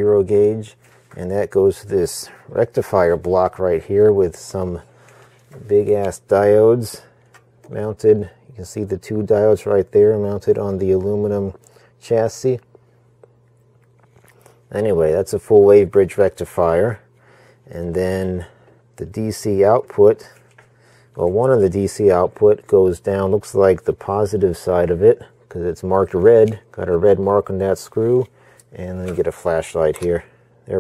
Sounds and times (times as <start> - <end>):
Speech: 0.0 - 4.9, 5.6 - 7.1, 7.7 - 12.7, 14.7 - 17.1, 17.7 - 20.4, 21.2 - 30.8
Inside, small room: 0.0 - 30.8.